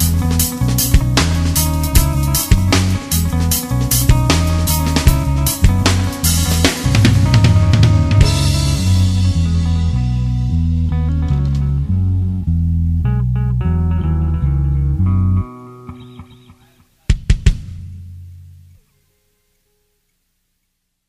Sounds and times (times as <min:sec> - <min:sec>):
Drum and bass: 0:00.0 - 0:14.4
Bass guitar: 0:00.0 - 0:18.8.